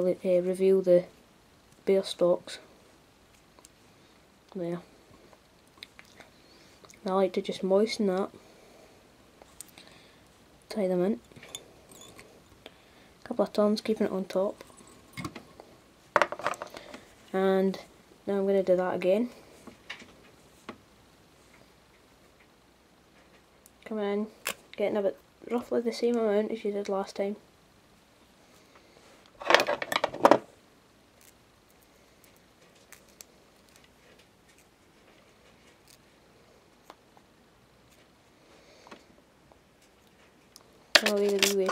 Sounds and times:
Speech: 0:00.0 - 0:01.2, 0:01.8 - 0:02.7, 0:07.0 - 0:08.3, 0:10.7 - 0:11.2, 0:13.2 - 0:14.6, 0:17.3 - 0:19.4, 0:23.8 - 0:27.4, 0:41.0 - 0:41.7.

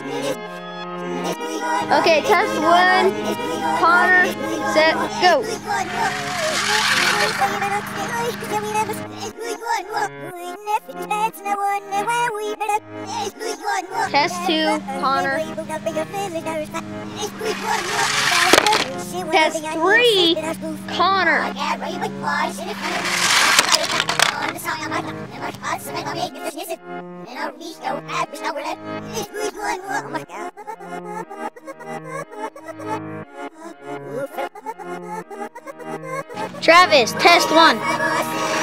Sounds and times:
Music: 0:00.0 - 0:38.6.

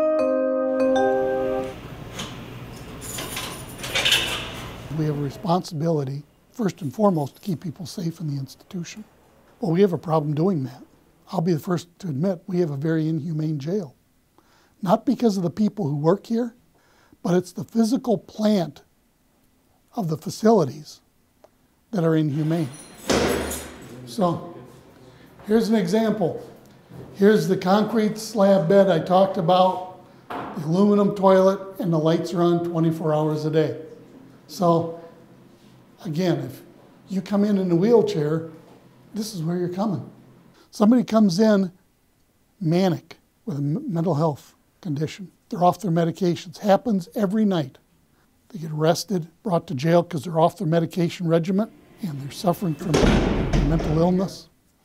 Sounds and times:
Speech: 0:04.9 - 0:14.0, 0:14.8 - 0:16.6, 0:17.2 - 0:18.9, 0:19.9 - 0:21.0, 0:21.9 - 0:22.8, 0:23.8 - 0:30.0, 0:30.6 - 0:35.2, 0:36.0 - 0:41.8, 0:42.6 - 0:47.8, 0:48.5 - 0:54.6.

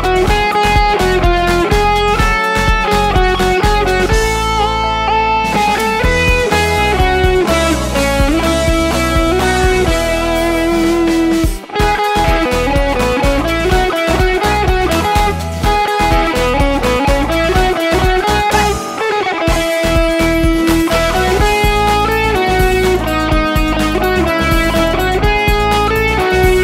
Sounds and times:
Guitar: 0:00.0 - 0:26.6.

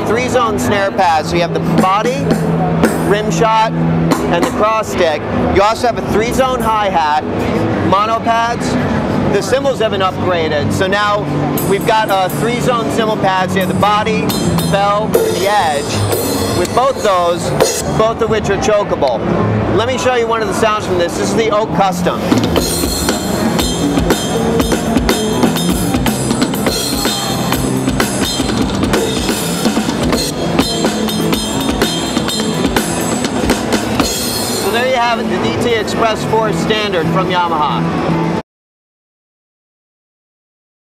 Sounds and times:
Drum: 0:01.6 - 0:03.4, 0:04.0 - 0:04.6, 0:11.6 - 0:18.1, 0:22.2 - 0:35.2
Drum kit: 0:01.6 - 0:03.4, 0:04.0 - 0:04.7, 0:11.5 - 0:18.2, 0:22.2 - 0:35.3.

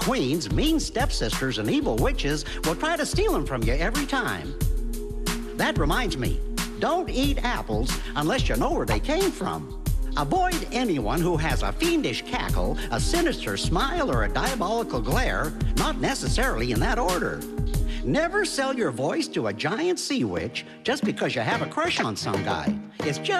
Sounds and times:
Speech: 0:00.0 - 0:04.6, 0:05.6 - 0:23.3
Music: 0:00.0 - 0:23.3.

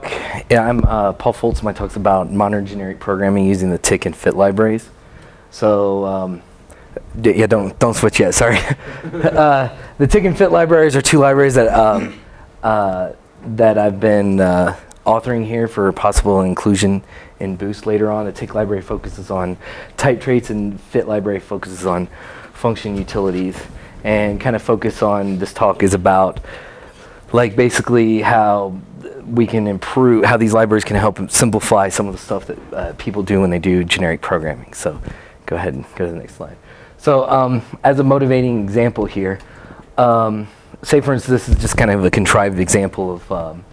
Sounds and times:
Speech: 0:00.0 - 0:04.9, 0:05.5 - 0:08.8, 0:09.4 - 0:26.4, 0:27.3 - 0:39.4, 0:40.0 - 0:43.7.

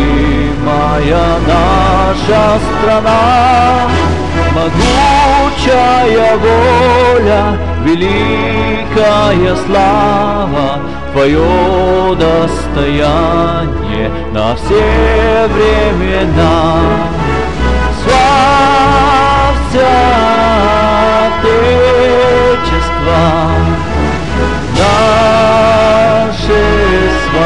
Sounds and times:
Male singing: 0:00.0 - 0:23.9, 0:24.7 - 0:27.4
Music: 0:00.0 - 0:27.4.

